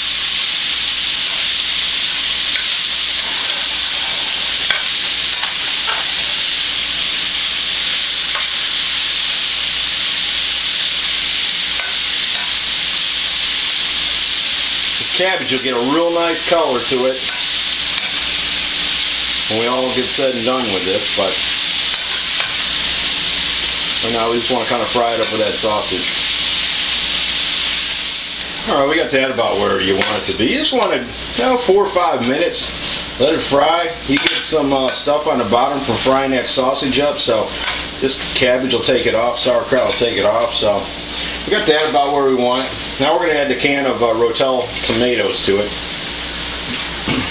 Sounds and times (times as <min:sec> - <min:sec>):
Cutlery, silverware: 0:04.7 - 0:06.1, 0:08.4 - 0:08.6, 0:11.8 - 0:12.6, 0:17.3 - 0:18.3, 0:21.9 - 0:22.7, 0:34.2 - 0:35.0.